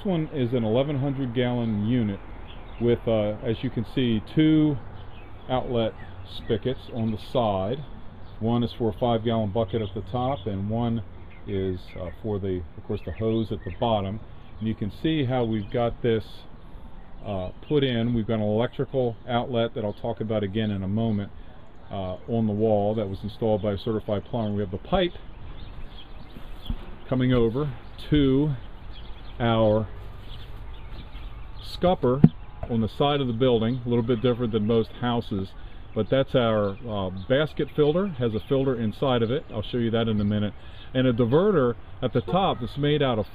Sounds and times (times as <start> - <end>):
Speech: 0.0 - 2.2, 2.8 - 4.8, 5.5 - 16.5, 17.2 - 25.2, 27.1 - 28.6, 29.4 - 30.0, 31.6 - 43.3.